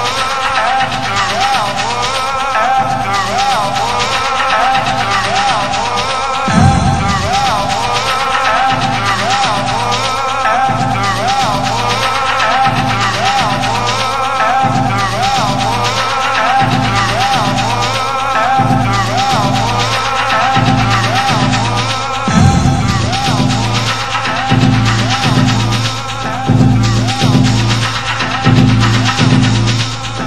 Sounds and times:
Music: 0:00.0 - 0:30.2.

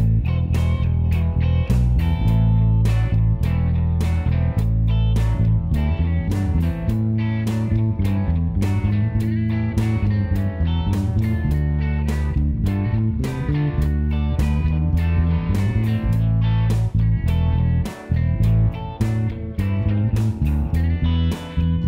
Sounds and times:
Steel guitar, slide guitar: 0:00.0 - 0:21.8.

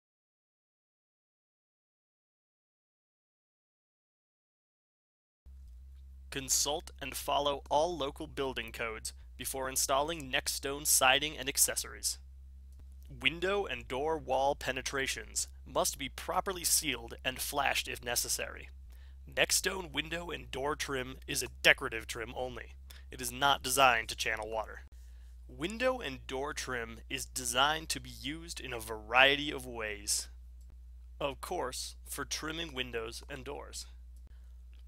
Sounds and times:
Speech: 0:06.3 - 0:12.2, 0:13.1 - 0:18.7, 0:19.3 - 0:24.9, 0:25.5 - 0:30.3, 0:31.2 - 0:34.0.

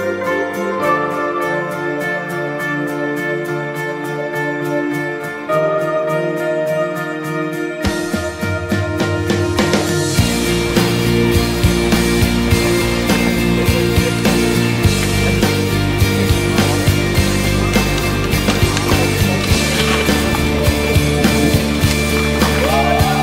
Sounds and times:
Music: 0:00.0 - 0:23.2.

